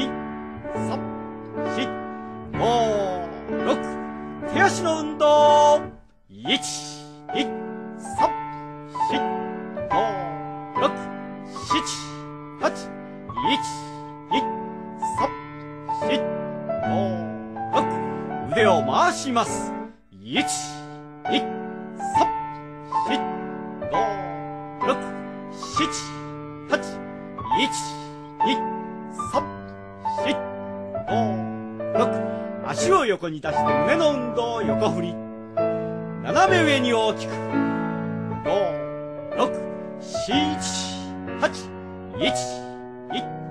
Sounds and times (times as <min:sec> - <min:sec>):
Music: 0:00.0 - 0:43.5
Speech: 0:00.8 - 0:01.0, 0:01.7 - 0:02.0, 0:02.6 - 0:08.3, 0:09.1 - 0:09.3, 0:09.9 - 0:14.5, 0:15.1 - 0:15.3, 0:16.0 - 0:16.3, 0:16.9 - 0:21.5, 0:22.1 - 0:22.3, 0:23.9 - 0:27.0, 0:27.6 - 0:28.6, 0:29.2 - 0:29.5, 0:30.1 - 0:30.4, 0:31.1 - 0:35.2, 0:36.2 - 0:37.4, 0:38.5 - 0:38.8, 0:39.4 - 0:43.3.